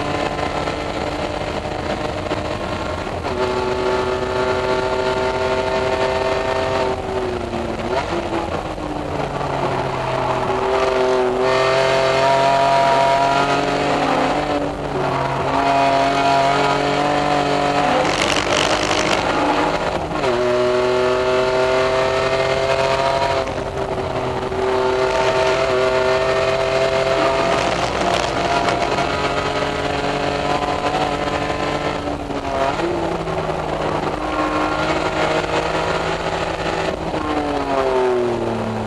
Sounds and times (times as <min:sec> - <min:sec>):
Car: 0:00.0 - 0:38.8.